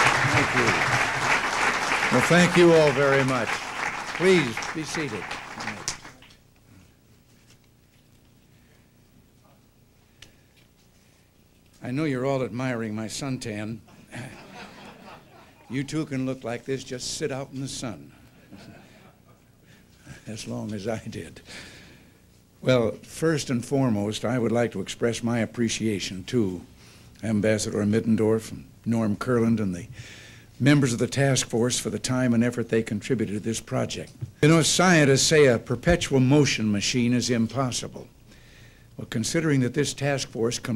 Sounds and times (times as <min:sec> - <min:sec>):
Narration, monologue: 0:02.0 - 0:40.7
Male speech, man speaking: 0:02.1 - 0:03.6, 0:04.2 - 0:05.8, 0:11.8 - 0:14.4, 0:15.7 - 0:18.2, 0:20.2 - 0:21.4, 0:22.6 - 0:29.9, 0:30.6 - 0:38.1, 0:39.0 - 0:40.7.